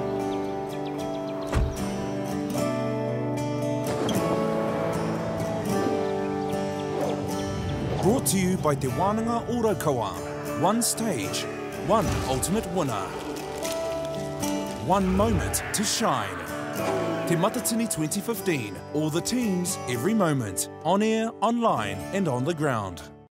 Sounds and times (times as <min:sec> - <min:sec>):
Music: 0:00.0 - 0:23.3
Speech: 0:08.0 - 0:13.2, 0:14.8 - 0:16.5, 0:17.3 - 0:23.1.